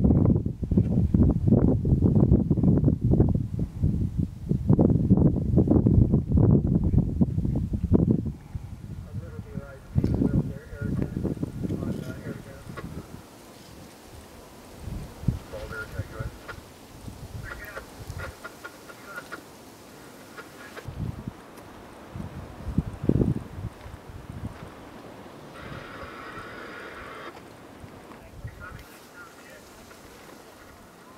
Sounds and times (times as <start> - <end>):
Wind noise (microphone): 0.0 - 18.5, 20.8 - 25.0, 25.6 - 28.9
Fire: 0.0 - 31.1.